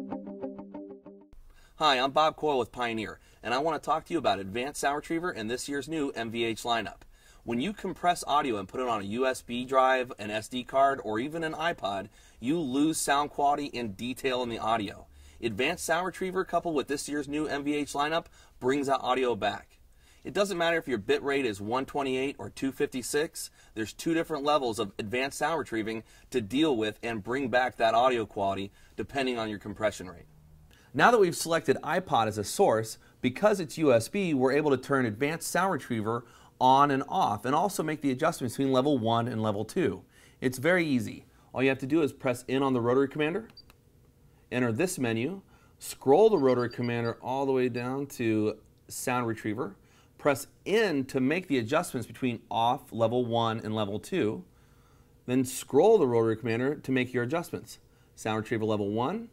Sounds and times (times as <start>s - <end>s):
Speech: 1.8s - 30.3s, 30.9s - 43.6s, 44.5s - 54.5s, 55.3s - 59.3s.